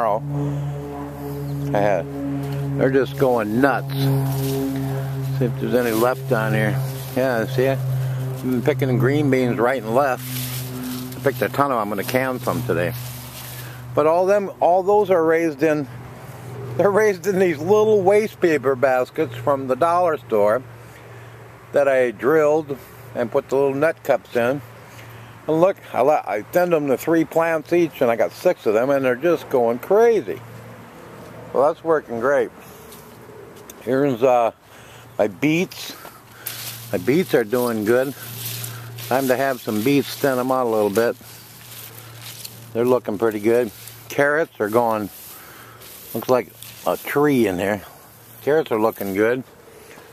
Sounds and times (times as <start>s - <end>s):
Speech: 0.0s - 0.2s, 1.6s - 2.1s, 2.8s - 4.2s, 5.3s - 7.8s, 8.4s - 10.2s, 11.2s - 13.0s, 14.0s - 15.9s, 16.8s - 20.7s, 21.7s - 24.6s, 25.5s - 30.4s, 31.5s - 32.6s, 33.8s - 34.6s, 35.2s - 36.1s, 36.9s - 38.2s, 39.0s - 41.2s, 42.7s - 45.2s, 46.1s - 49.5s.